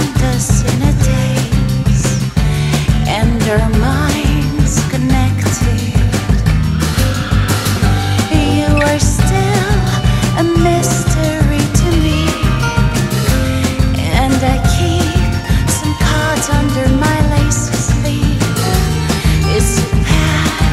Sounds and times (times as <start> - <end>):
Grunge: 0.0 - 20.7.